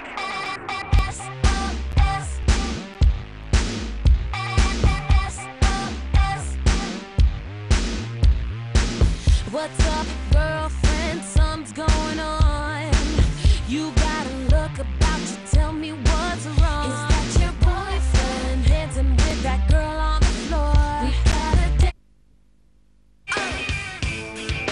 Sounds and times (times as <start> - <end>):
Music: 0.0 - 22.0, 23.3 - 24.7.